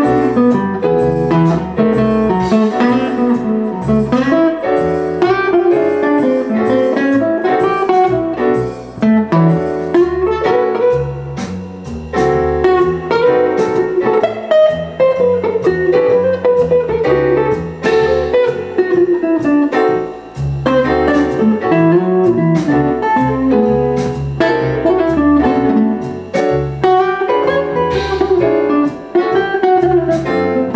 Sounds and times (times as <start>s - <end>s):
Guitar: 0.0s - 30.7s
Jazz: 0.0s - 30.7s.